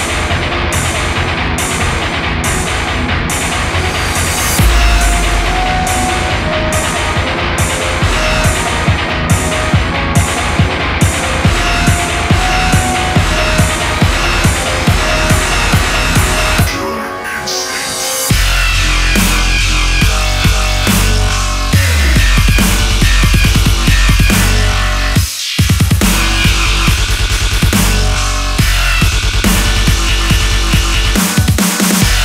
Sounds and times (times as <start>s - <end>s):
Hum: 4.0s - 10.1s.